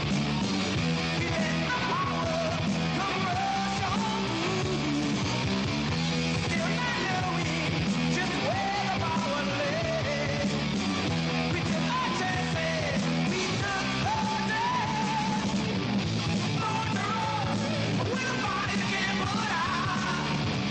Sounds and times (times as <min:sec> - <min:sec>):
Music: 0:00.0 - 0:20.7.